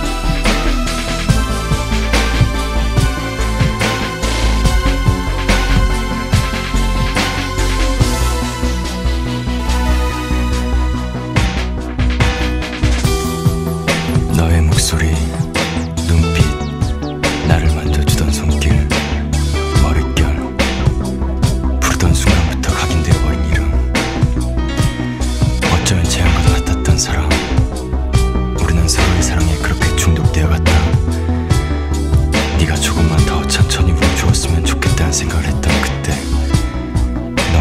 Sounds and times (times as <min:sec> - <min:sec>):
Music: 0:00.0 - 0:37.6.